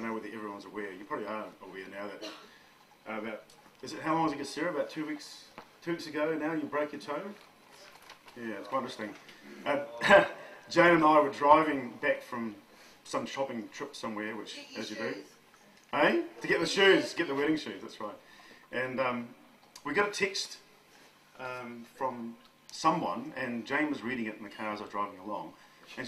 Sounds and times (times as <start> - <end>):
Male speech, man speaking: 0.0 - 2.4, 3.0 - 7.4, 8.3 - 15.3, 15.9 - 20.7, 21.4 - 26.0
Narration, monologue: 0.0 - 26.0
Female speech, woman speaking: 14.5 - 15.4.